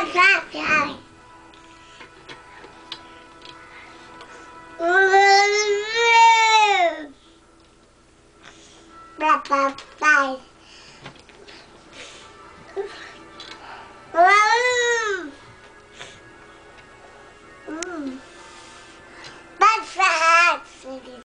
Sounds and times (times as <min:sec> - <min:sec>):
Music: 0:00.0 - 0:21.2.